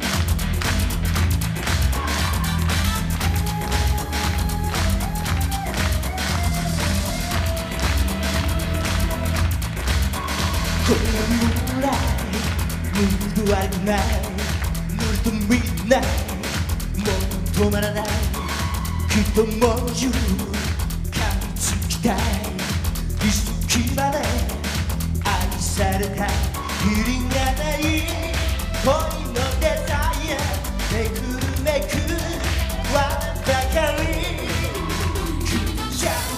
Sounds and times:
Music of Asia: 0.0s - 36.3s
Singing: 1.9s - 9.6s, 10.2s - 24.7s, 25.3s - 36.3s.

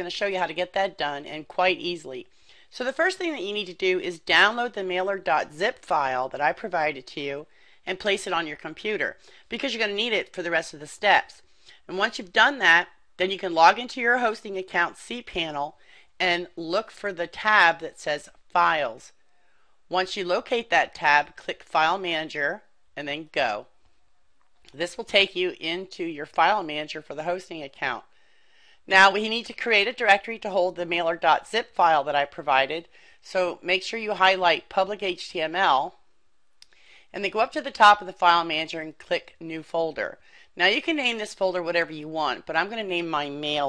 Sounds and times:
Speech: 0.0s - 19.1s, 19.9s - 23.7s, 24.7s - 28.1s, 28.9s - 36.0s, 37.1s - 43.6s.

